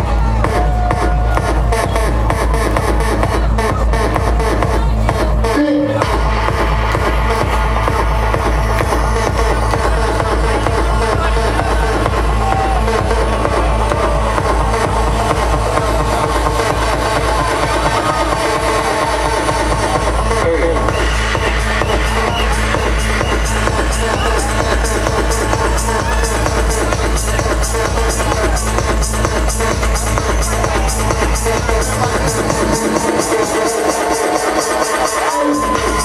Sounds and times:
Electronic music: 0.0s - 36.0s
Speech: 3.0s - 6.2s, 19.8s - 21.0s.

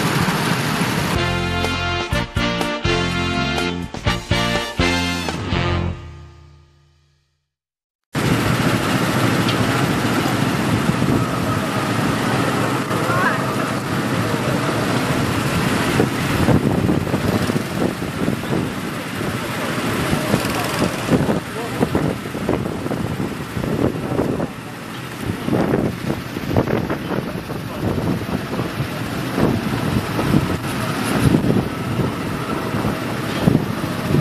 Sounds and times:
Outside, urban or manmade: 0.0s - 34.2s
Music: 1.2s - 7.4s
Speech: 12.2s - 14.9s, 19.0s - 22.2s, 27.0s - 29.3s.

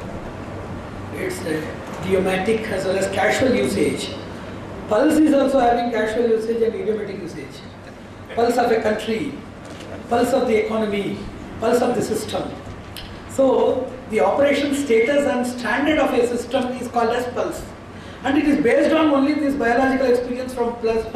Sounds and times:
Male speech, man speaking: 1.1s - 4.2s, 4.9s - 7.7s, 8.3s - 9.4s, 10.1s - 12.6s, 13.3s - 21.1s.

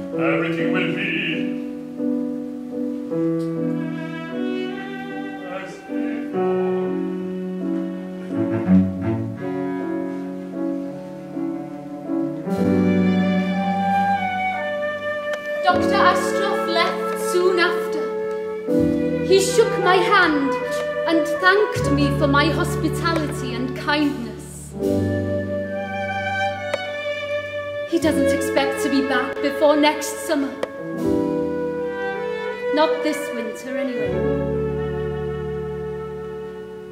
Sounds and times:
Cello: 0.0s - 36.9s
Opera: 0.0s - 36.9s.

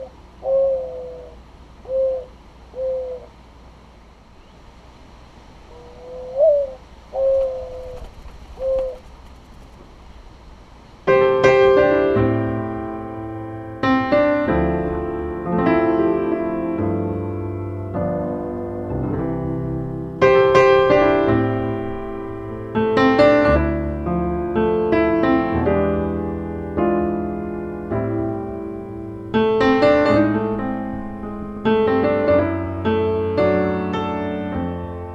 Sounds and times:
Pigeon, dove: 5.8s - 9.4s
Music: 11.1s - 35.1s.

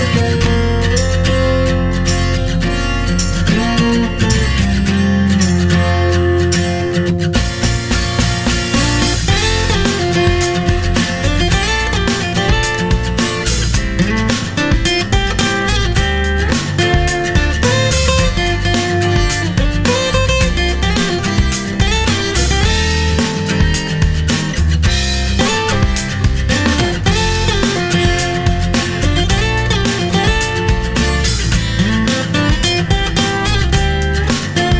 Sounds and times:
Acoustic guitar: 0.0s - 34.7s
Strum: 0.0s - 34.7s.

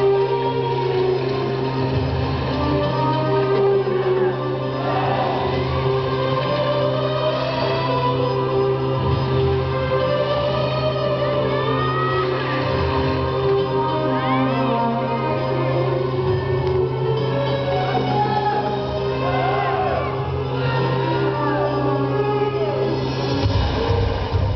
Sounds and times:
Music: 0.0s - 24.5s.

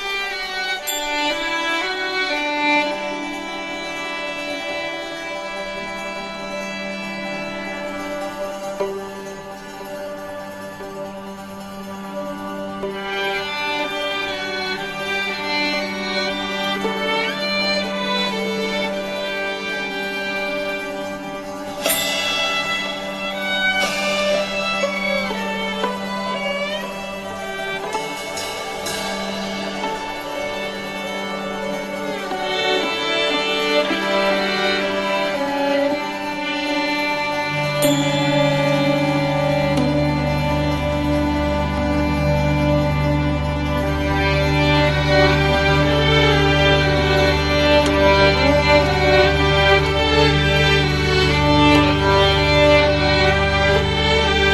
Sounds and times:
Music: 0.0s - 54.5s.

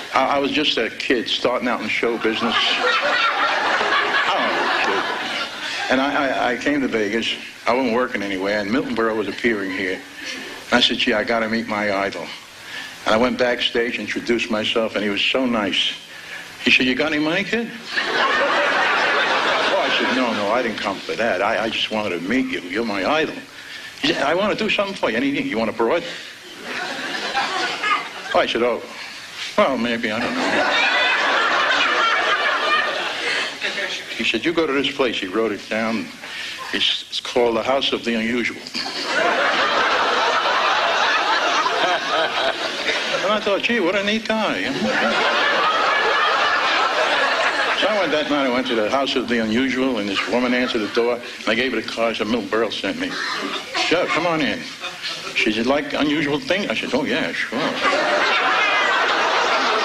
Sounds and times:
Speech: 0.1s - 2.8s, 5.9s - 10.1s, 10.7s - 12.4s, 13.0s - 16.0s, 16.6s - 17.8s, 19.7s - 26.2s, 27.8s - 29.0s, 29.6s - 30.4s, 34.0s - 38.8s, 43.2s - 45.1s, 47.8s - 58.0s.

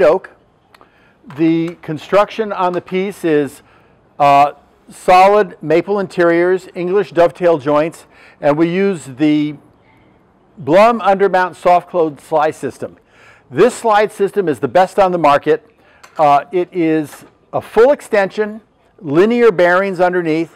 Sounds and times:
Speech: 0.0s - 0.4s, 1.3s - 3.6s, 4.2s - 9.6s, 10.6s - 20.5s.

